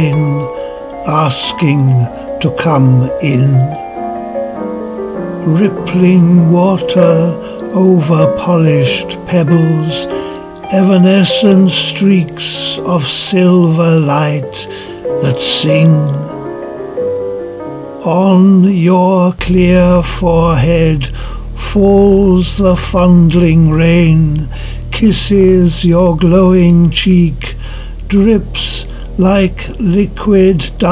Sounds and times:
Music: 0.0 - 30.9.

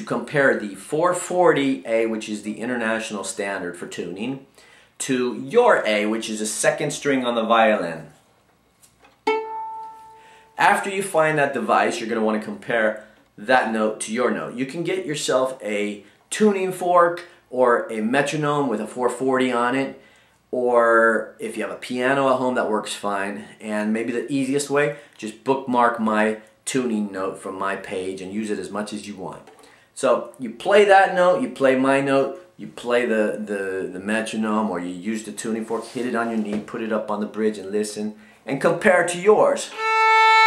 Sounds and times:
Speech: 0.0 - 8.2, 10.6 - 20.0, 20.6 - 39.8.

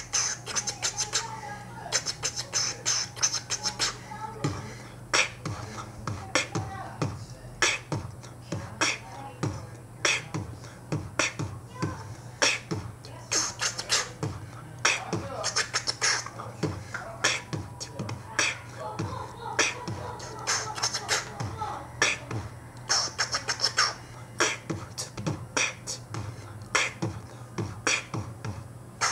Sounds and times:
Beatboxing: 0.0 - 29.1
Speech: 0.5 - 7.8, 8.4 - 10.8, 11.7 - 22.3.

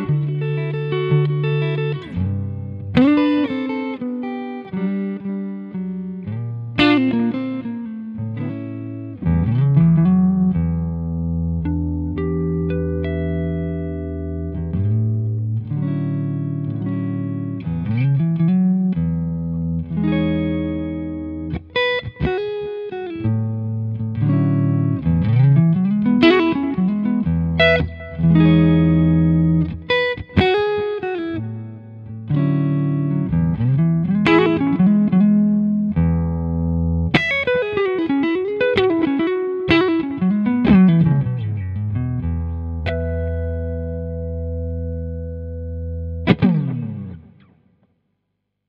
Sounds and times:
Guitar: 0.0 - 48.0.

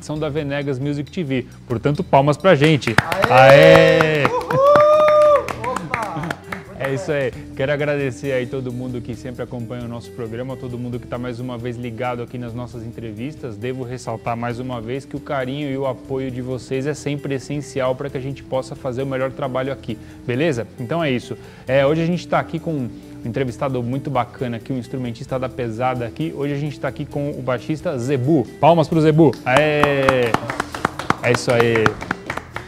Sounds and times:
Music: 0.0 - 32.6
Speech: 6.8 - 30.4, 31.2 - 32.0.

